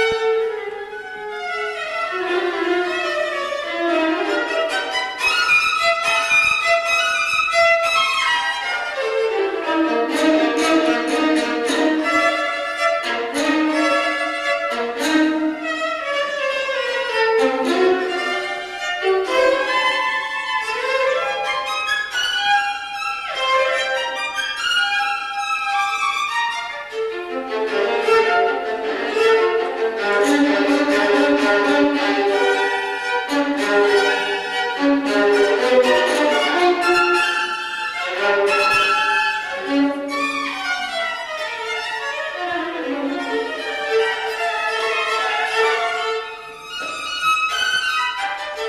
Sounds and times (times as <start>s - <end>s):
Violin, fiddle: 0.0s - 48.6s.